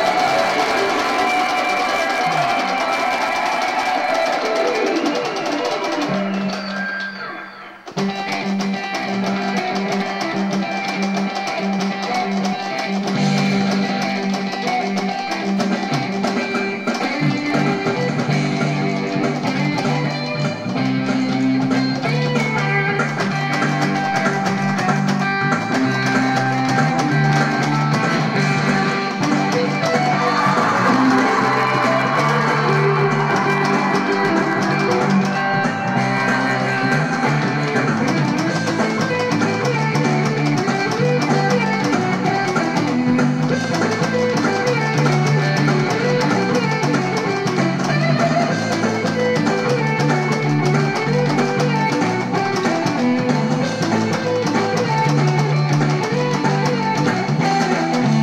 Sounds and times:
Electric guitar: 0.0s - 58.2s.

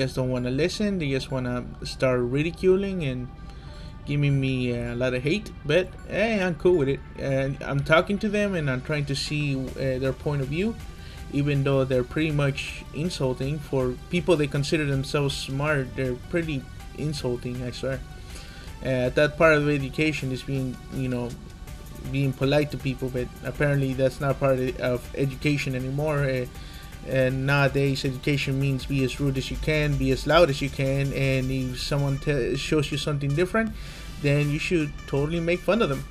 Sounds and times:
Speech: 0.0s - 3.3s, 4.1s - 18.0s, 18.8s - 21.4s, 22.0s - 36.1s
Music: 0.0s - 36.1s.

